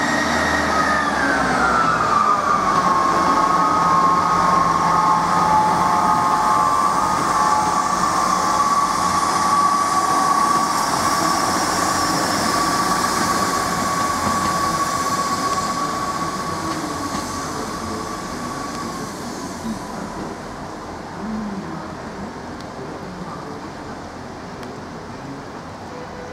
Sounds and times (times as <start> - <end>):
Railroad car, train wagon: 0.0 - 26.3
Train: 0.0 - 26.3
Clickety-clack: 13.9 - 14.7, 16.7 - 17.4.